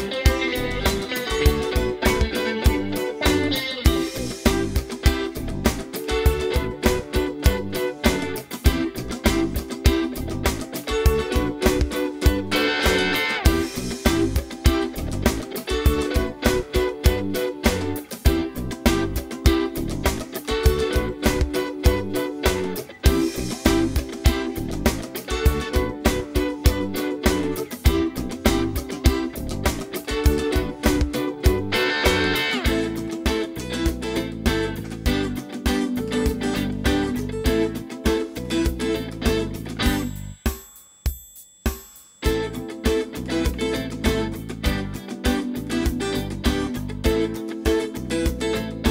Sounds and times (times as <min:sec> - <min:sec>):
Guitar: 0:00.0 - 0:40.5, 0:42.2 - 0:48.9.